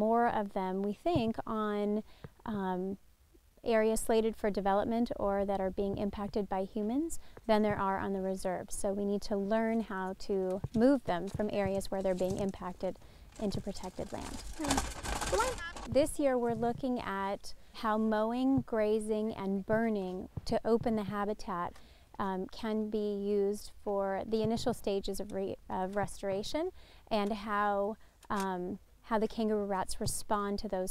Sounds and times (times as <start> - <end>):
Speech: 0.0 - 3.0, 3.6 - 30.9.